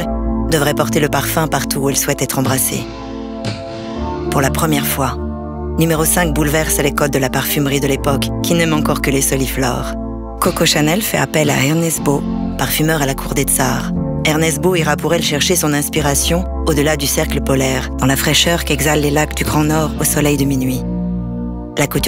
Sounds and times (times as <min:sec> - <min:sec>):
Speech: 0:00.0 - 0:02.9, 0:04.3 - 0:05.2, 0:05.8 - 0:20.9, 0:21.8 - 0:22.0
Music: 0:00.0 - 0:22.0.